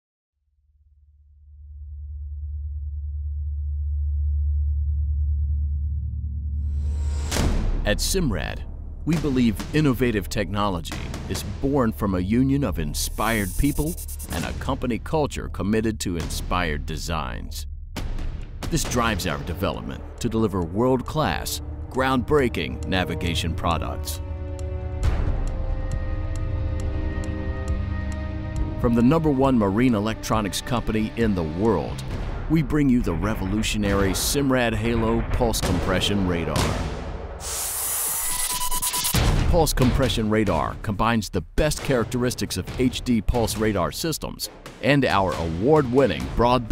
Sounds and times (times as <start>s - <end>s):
Music: 1.1s - 46.7s
Speech: 7.8s - 17.6s, 18.7s - 24.2s, 28.8s - 36.8s, 39.4s - 46.7s.